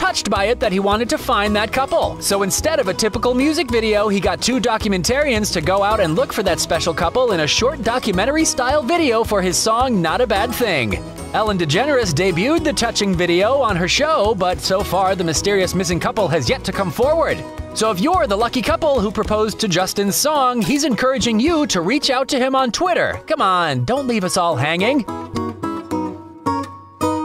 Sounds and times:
Speech: 0.0 - 25.1
Music: 0.0 - 27.2.

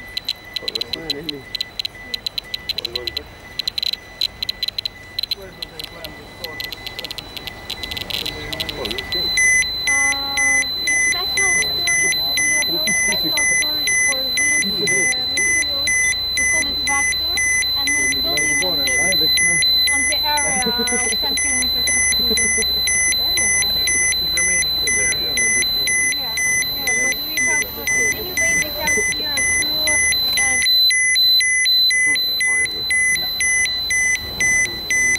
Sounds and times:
Alarm: 0.0 - 35.1
Outside, urban or manmade: 0.0 - 35.1
Speech: 0.6 - 3.3, 5.3 - 7.1, 8.1 - 22.5, 23.2 - 30.7, 32.0 - 33.5.

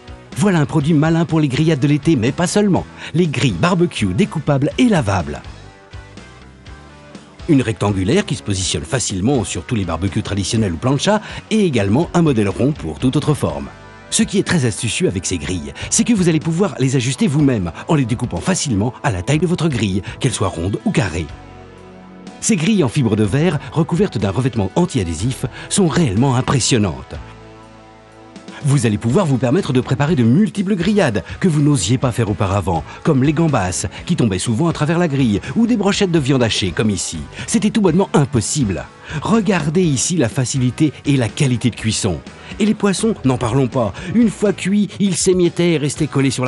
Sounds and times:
Music: 0.0 - 46.4
Speech: 0.4 - 5.5, 7.5 - 21.3, 22.4 - 27.2, 28.6 - 46.4.

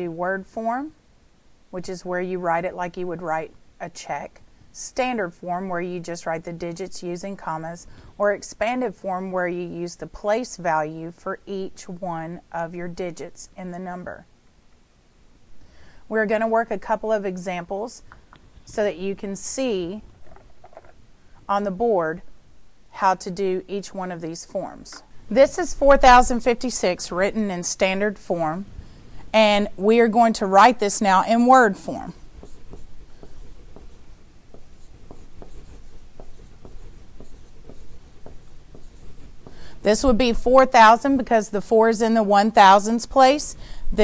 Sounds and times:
Speech: 0.0 - 1.0, 1.8 - 14.3, 16.1 - 18.0, 18.7 - 20.0, 21.5 - 22.2, 23.0 - 28.6, 29.4 - 32.2, 39.8 - 44.0.

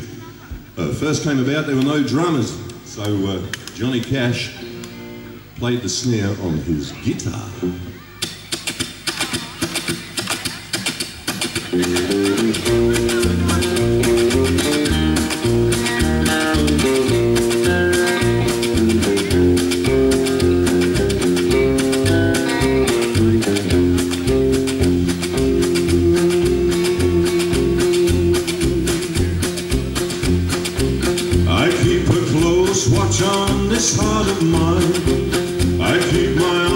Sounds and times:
Speech: 0.0 - 4.7, 5.6 - 8.3, 11.7 - 14.3
Bluegrass: 0.0 - 36.7
Traditional music: 7.6 - 36.7.

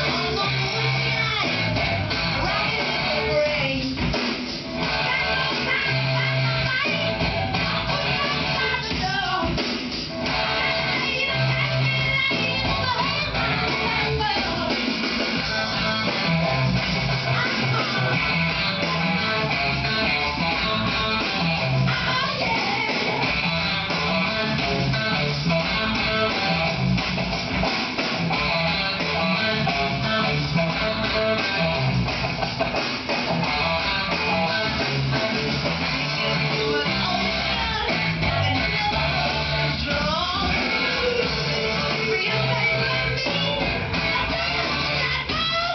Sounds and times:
Guitar: 0.0 - 45.7.

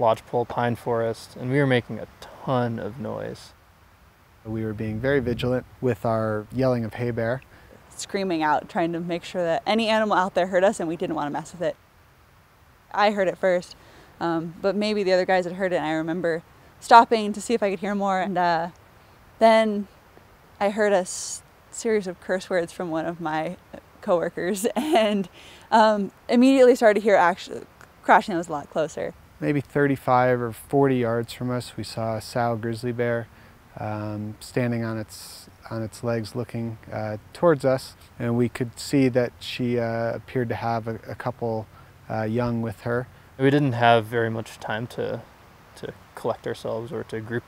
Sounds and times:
Speech: 0.0 - 3.5, 4.5 - 7.4, 8.0 - 11.8, 12.9 - 18.7, 19.4 - 19.9, 20.6 - 45.2, 45.8 - 47.4.

